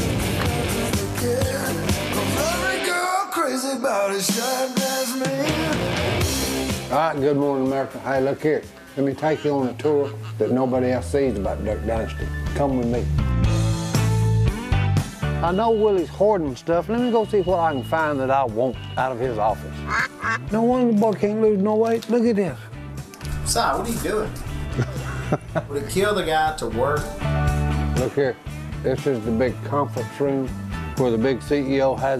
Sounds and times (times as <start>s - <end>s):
Music: 0.0s - 32.1s
Speech: 6.9s - 13.1s, 15.4s - 19.7s, 20.5s - 22.6s, 28.0s - 32.1s.